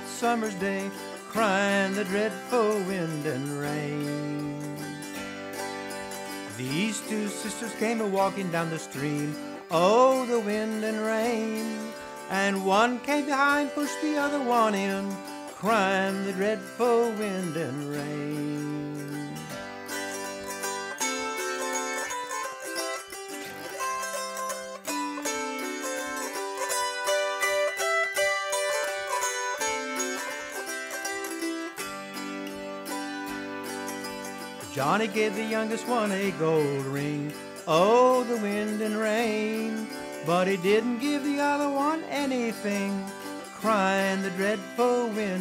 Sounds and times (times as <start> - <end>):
Music: 0.0 - 45.4.